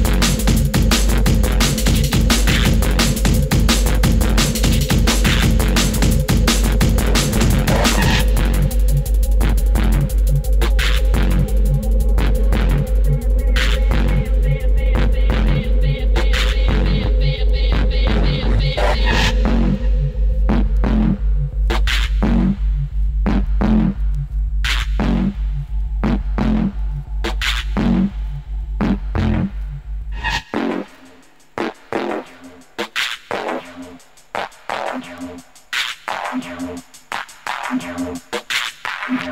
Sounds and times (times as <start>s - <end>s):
Drum and bass: 0.0s - 39.3s.